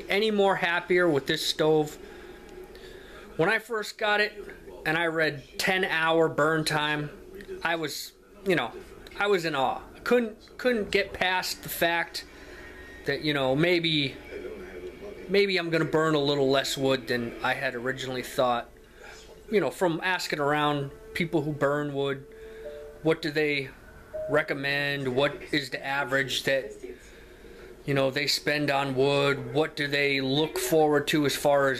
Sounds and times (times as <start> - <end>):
Speech: 0.0 - 2.0, 3.2 - 12.3, 13.0 - 22.3, 23.0 - 27.1, 27.9 - 31.7.